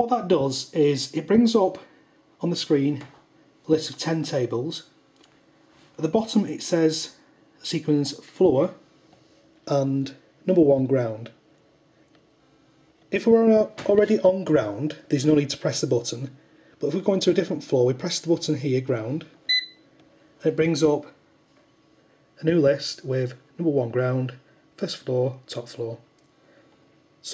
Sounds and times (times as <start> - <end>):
Speech: 0.0 - 5.0, 6.0 - 8.8, 9.7 - 11.4, 13.1 - 19.4, 20.4 - 21.2, 22.4 - 26.1.